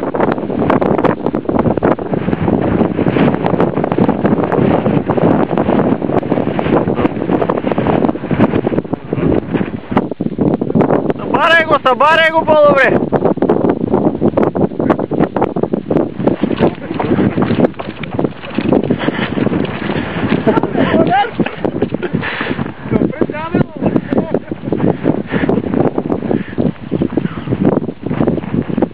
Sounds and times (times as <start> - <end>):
Wind noise (microphone): 0.0 - 28.9
Speech: 11.2 - 13.0, 22.9 - 24.5.